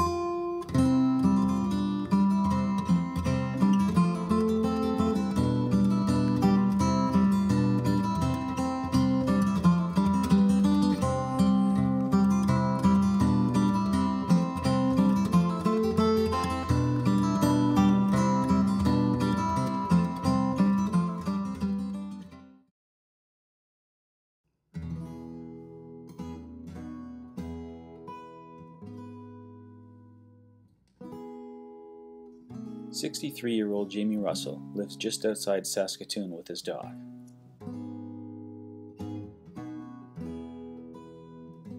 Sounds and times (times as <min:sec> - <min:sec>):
Music: 0:00.0 - 0:22.7, 0:24.7 - 0:41.7
Speech: 0:33.0 - 0:37.0.